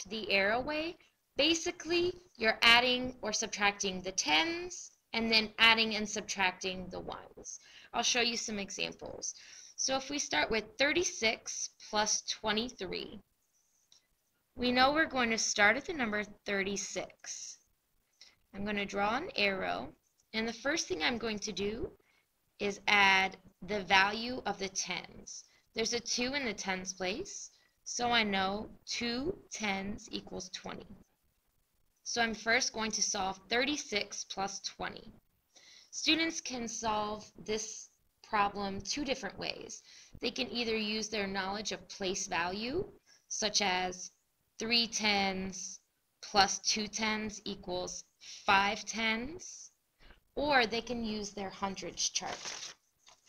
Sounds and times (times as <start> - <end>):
Speech: 0.0 - 13.2, 14.6 - 17.6, 18.6 - 22.0, 22.6 - 31.0, 32.1 - 35.2, 36.0 - 49.7, 50.4 - 52.6.